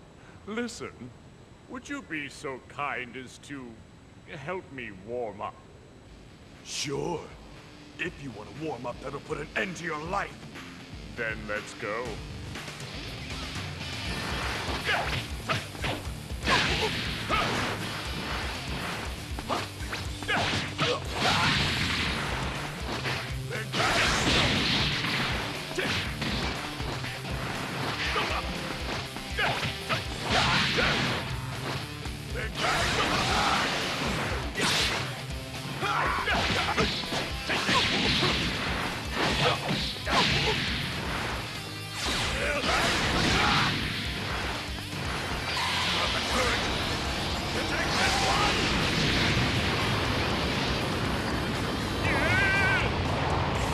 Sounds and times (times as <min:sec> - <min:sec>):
Music: 0:06.6 - 0:53.7.